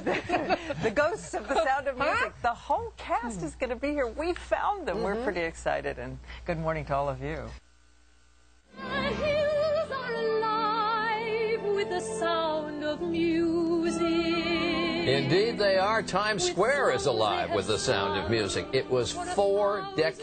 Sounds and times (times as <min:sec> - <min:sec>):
Music: 0:08.7 - 0:20.2.